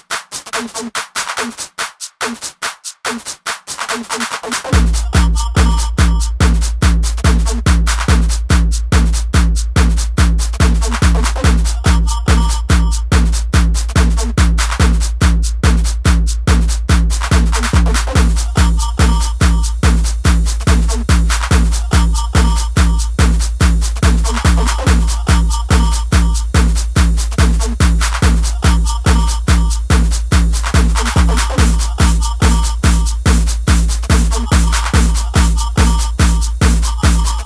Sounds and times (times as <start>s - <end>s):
Music: 0.0s - 37.4s.